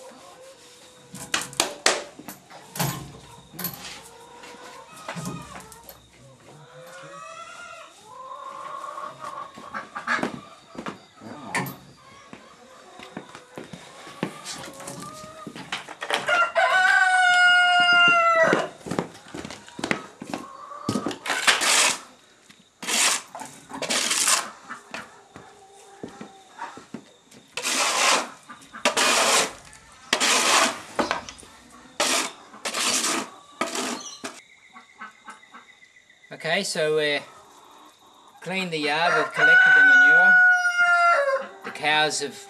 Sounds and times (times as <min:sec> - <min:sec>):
Livestock, farm animals, working animals: 0:00.0 - 0:42.5.